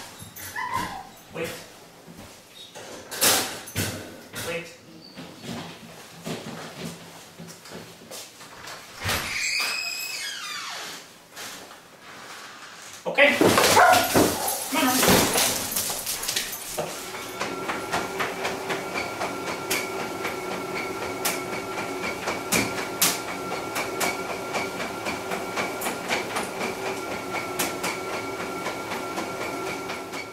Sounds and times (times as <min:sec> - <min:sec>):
Speech: 0:01.3 - 0:01.7, 0:04.4 - 0:04.8, 0:13.0 - 0:13.5, 0:14.7 - 0:15.2
Bow-wow: 0:13.7 - 0:14.6.